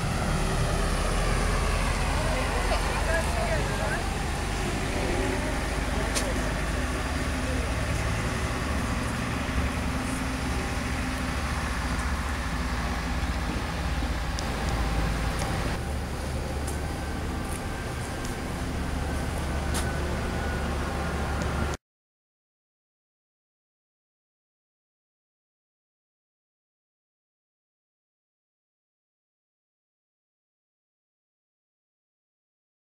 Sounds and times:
Outside, urban or manmade: 0.0s - 21.8s
Speech: 2.2s - 4.1s, 4.8s - 8.0s.

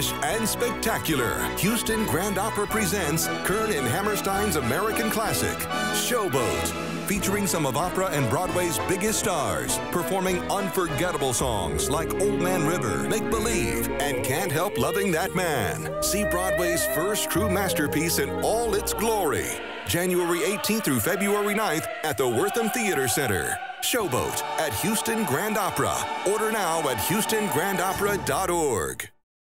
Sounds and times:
Music: 0.0s - 29.2s
Speech: 0.0s - 29.2s.

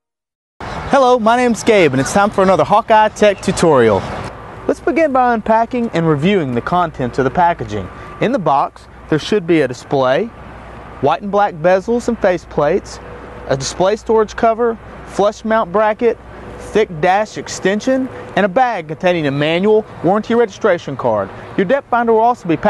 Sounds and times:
Vehicle: 0.6s - 22.6s
Speech: 0.9s - 4.1s, 4.7s - 10.3s, 11.0s - 22.6s.

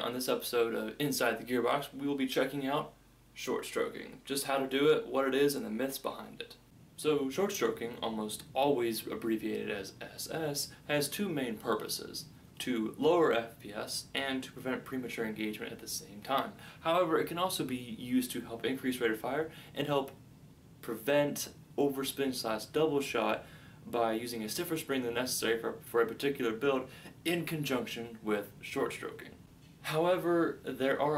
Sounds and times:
Speech: 0.0s - 20.2s, 20.8s - 31.1s
Inside, small room: 0.0s - 31.1s.

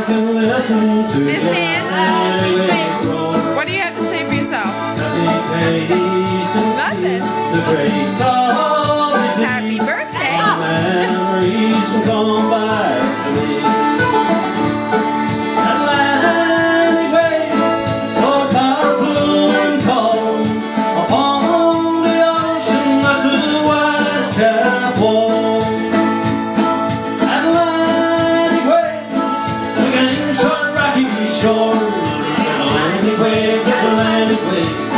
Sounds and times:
Music: 0.0s - 34.9s.

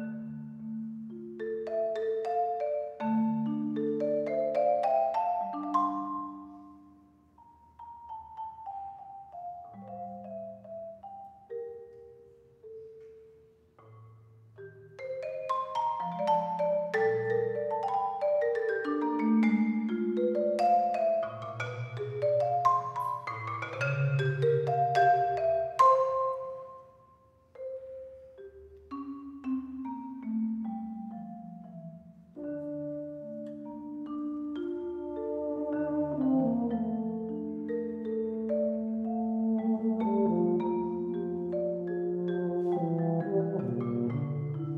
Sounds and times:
Glockenspiel: 0.0s - 44.7s
Marimba, xylophone: 0.0s - 44.7s.

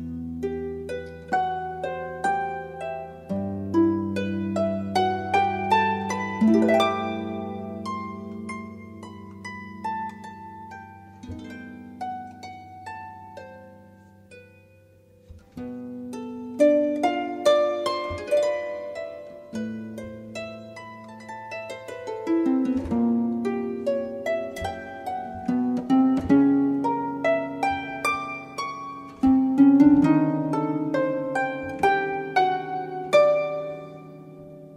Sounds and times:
Harp: 0.0s - 34.7s.

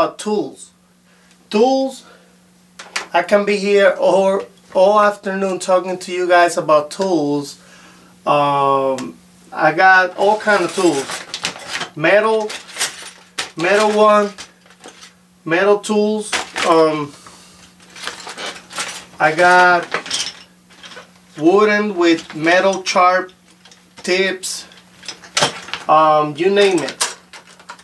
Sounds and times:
Speech: 0.0s - 0.8s, 1.5s - 2.1s, 3.1s - 7.6s, 8.3s - 11.2s, 12.0s - 12.6s, 13.6s - 14.4s, 15.5s - 17.2s, 19.2s - 20.0s, 21.4s - 23.3s, 24.0s - 24.7s, 25.9s - 27.0s.

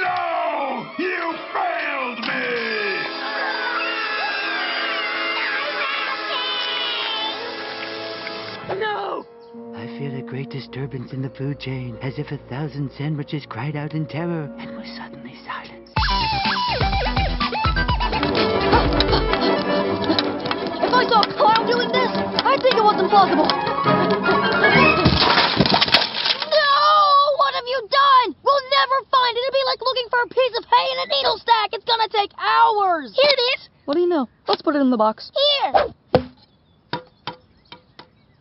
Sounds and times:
Music: 0.9s - 25.2s
Speech: 9.8s - 15.8s, 20.9s - 23.5s, 26.5s - 35.8s.

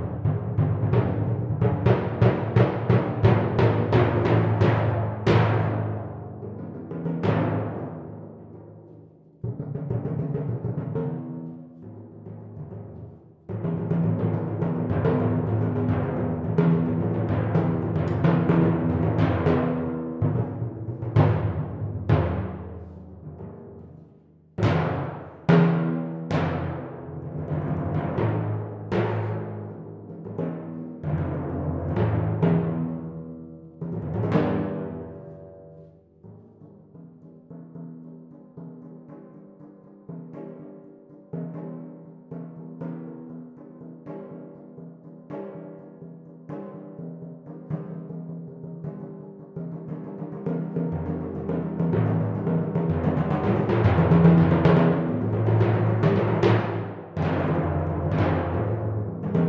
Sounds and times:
Timpani: 0.0s - 59.4s.

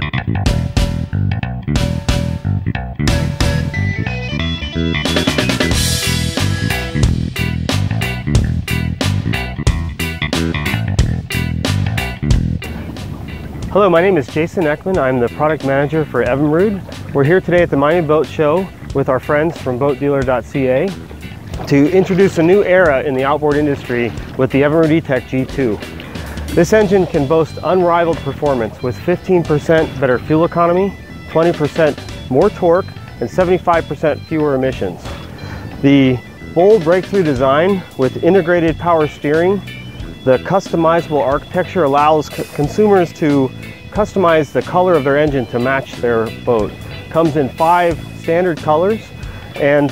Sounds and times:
Music: 0.0s - 49.9s
Speech: 13.7s - 20.9s, 21.7s - 25.8s, 26.6s - 35.1s, 35.8s - 39.6s, 40.3s - 49.9s.

